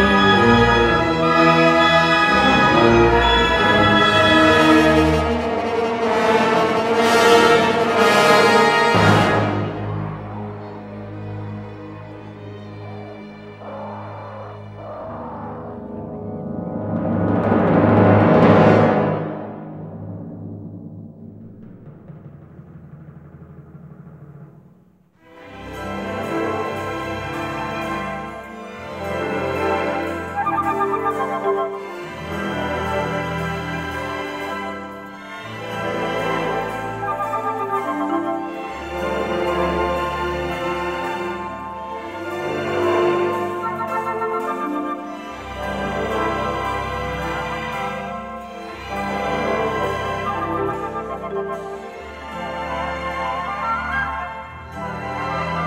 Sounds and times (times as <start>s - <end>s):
Timpani: 0.0s - 55.6s.